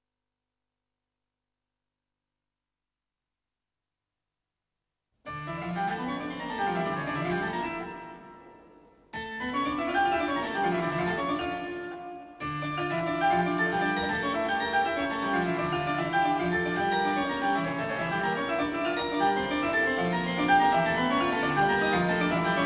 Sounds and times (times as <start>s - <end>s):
Classical music: 5.4s - 22.6s.